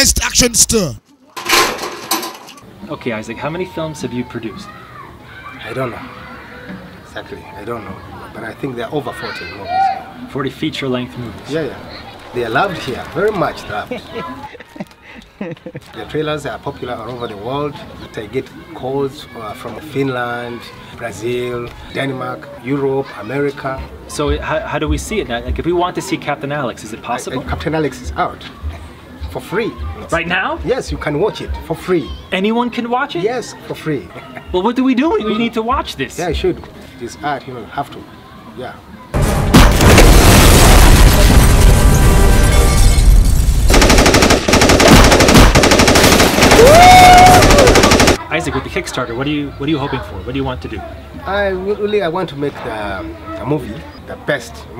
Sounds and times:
Machine gun: 43.7s - 48.2s.

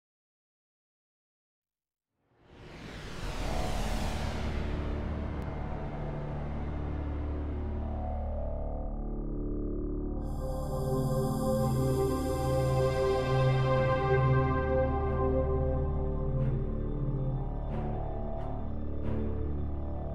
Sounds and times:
Music: 2.3s - 20.1s.

